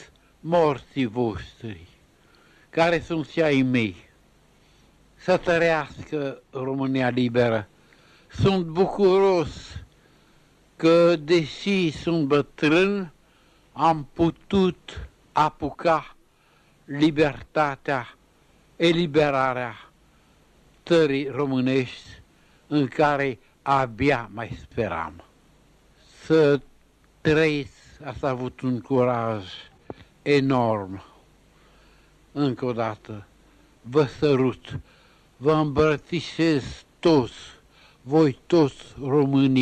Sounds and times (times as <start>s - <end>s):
Speech: 0.0s - 2.0s, 2.7s - 4.2s, 5.2s - 7.7s, 8.3s - 9.9s, 10.8s - 13.2s, 13.8s - 16.2s, 16.9s - 18.2s, 18.8s - 19.9s, 20.8s - 25.3s, 26.0s - 31.2s, 32.4s - 33.3s, 33.9s - 39.6s.